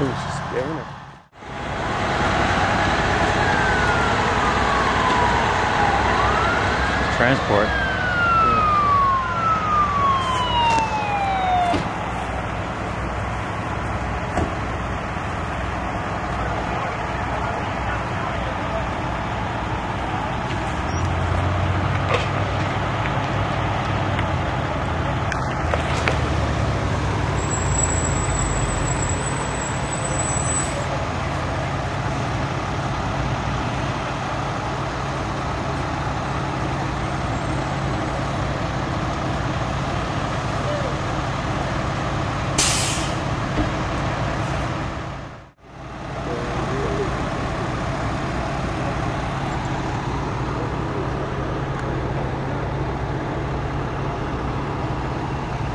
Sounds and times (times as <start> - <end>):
Car: 0.0 - 55.7.